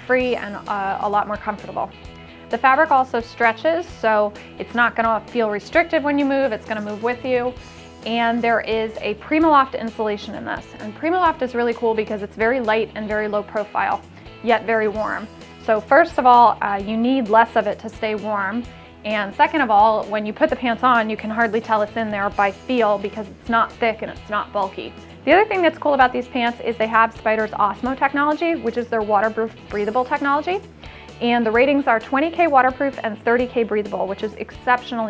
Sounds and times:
Speech: 0.0 - 1.9, 2.5 - 30.6, 31.2 - 35.0
Music: 0.0 - 35.0.

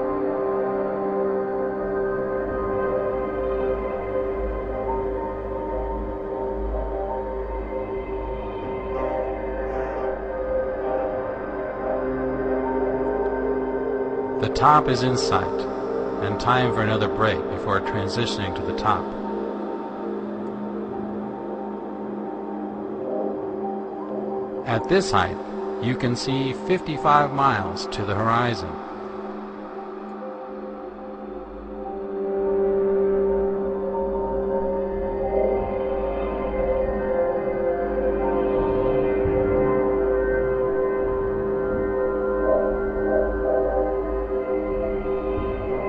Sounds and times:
Ambient music: 0.0 - 45.8.

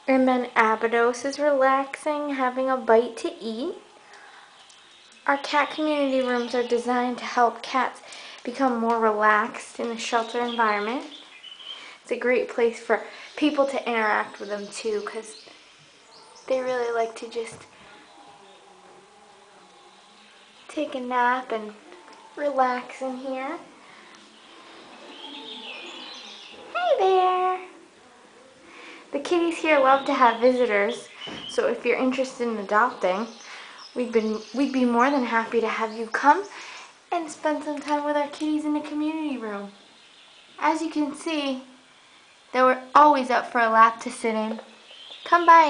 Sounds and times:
Speech: 0.0 - 3.8, 5.2 - 11.2, 12.0 - 15.5, 16.5 - 17.7, 20.7 - 23.7, 26.6 - 27.8, 28.4 - 39.8, 40.6 - 41.8, 42.5 - 45.7
Animal: 15.0 - 20.8, 23.6 - 29.0.

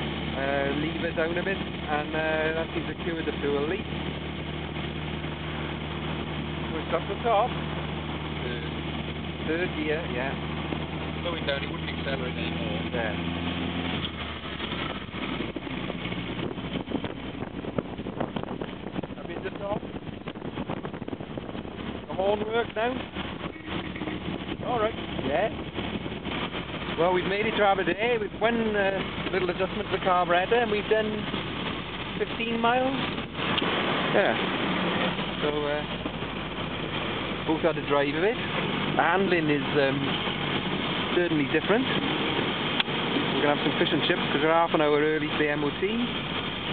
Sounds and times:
Car: 0.0 - 46.7
Speech: 0.4 - 3.8, 6.7 - 7.5, 9.4 - 10.4, 11.2 - 13.2, 19.2 - 19.8, 22.1 - 23.0, 24.6 - 25.6, 27.0 - 31.3, 32.2 - 33.0, 34.1 - 34.4, 35.4 - 35.9, 37.4 - 40.2, 41.1 - 42.0, 43.4 - 46.1.

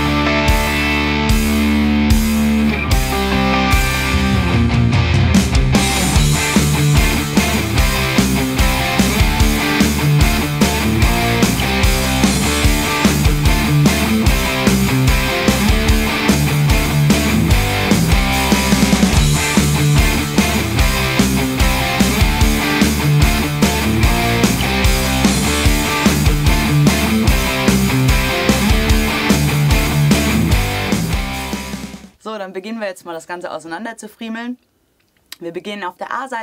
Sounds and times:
Electric guitar: 0.0 - 32.2.

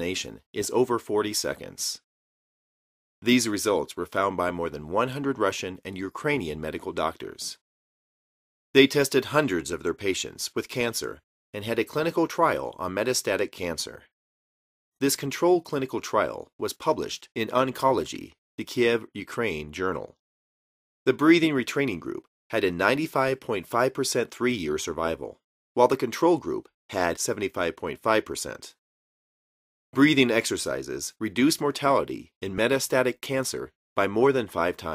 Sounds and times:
Speech: 0.0 - 2.1, 3.2 - 7.6, 8.8 - 14.1, 15.0 - 20.2, 21.1 - 28.8, 30.0 - 34.9.

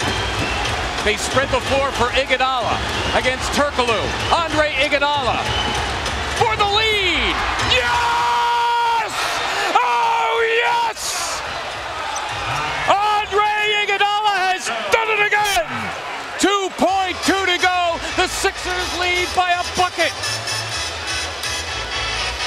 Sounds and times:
Music: 0.0 - 8.4, 17.0 - 22.4
Speech: 1.0 - 5.5, 6.4 - 8.0, 12.9 - 20.2.

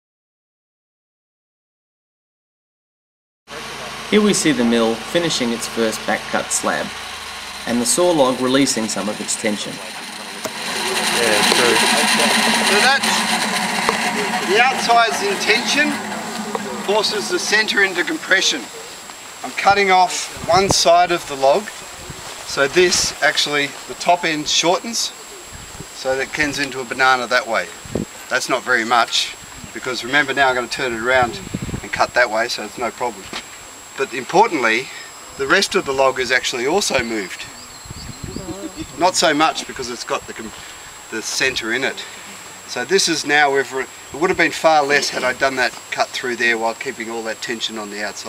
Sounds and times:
Speech: 3.5 - 6.9, 7.7 - 10.0, 10.8 - 13.3, 14.2 - 18.8, 19.4 - 21.7, 22.5 - 25.2, 26.0 - 33.4, 34.0 - 37.5, 38.2 - 48.2.

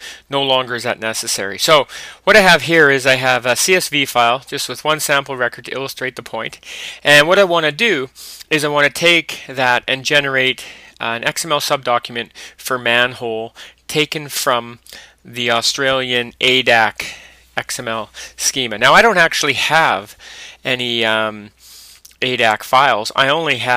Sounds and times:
Speech: 0.3 - 21.5, 22.2 - 23.7.

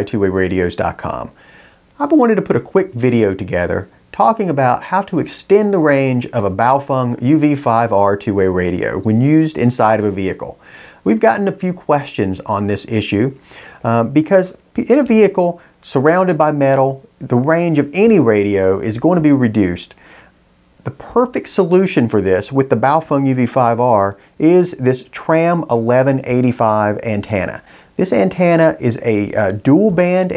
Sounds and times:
Speech: 0.0 - 1.4, 2.0 - 20.0, 20.8 - 30.3.

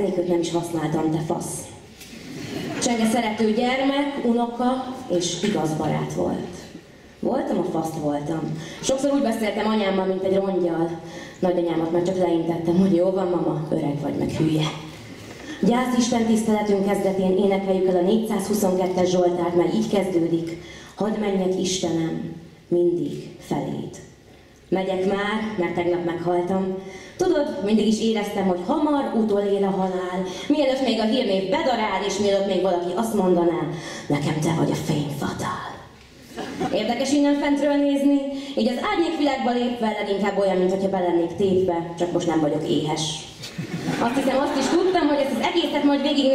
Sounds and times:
Speech: 0.0 - 1.8, 2.8 - 14.9, 15.6 - 24.1, 24.7 - 35.9, 36.7 - 43.4.

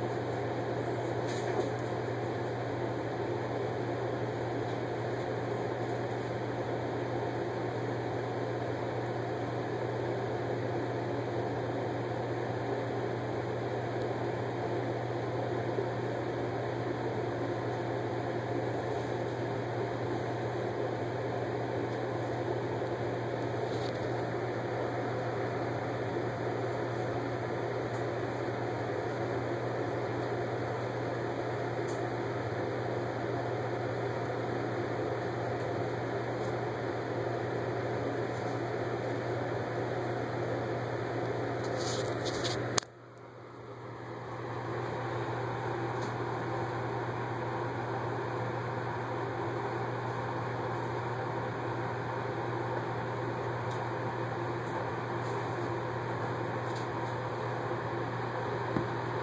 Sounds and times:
Inside, small room: 0.0 - 59.2.

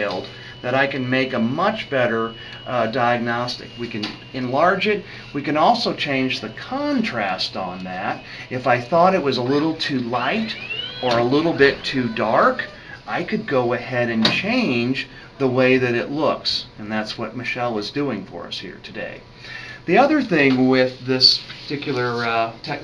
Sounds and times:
Speech: 0.0 - 19.2, 19.9 - 22.8
Inside, small room: 0.0 - 22.8.

